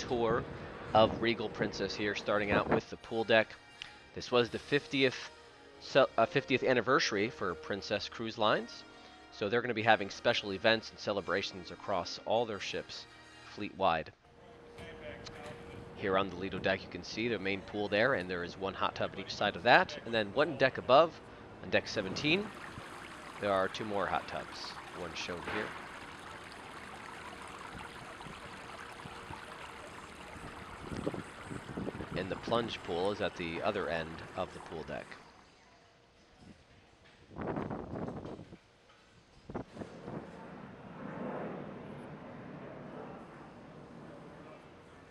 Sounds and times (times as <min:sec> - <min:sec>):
Speech: 0:00.0 - 0:00.4, 0:01.0 - 0:03.6, 0:04.2 - 0:05.3, 0:05.9 - 0:08.8, 0:09.4 - 0:22.5, 0:23.4 - 0:25.8, 0:32.2 - 0:35.9
Outside, urban or manmade: 0:00.0 - 0:45.1.